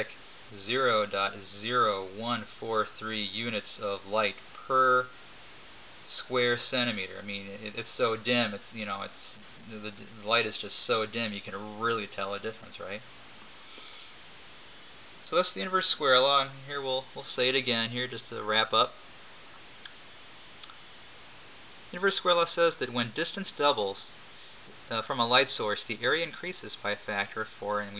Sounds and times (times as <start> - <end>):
Speech: 0.0 - 5.2, 6.1 - 13.1, 15.3 - 19.0, 21.9 - 27.9.